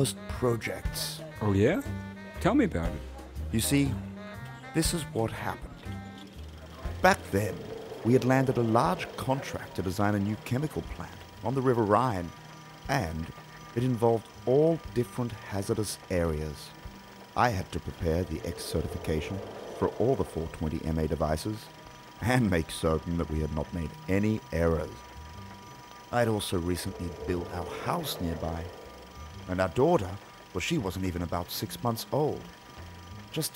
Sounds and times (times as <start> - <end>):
Speech: 0.0 - 4.0, 4.8 - 5.8, 6.8 - 12.3, 12.9 - 16.7, 17.4 - 25.0, 26.2 - 28.7, 29.5 - 32.5.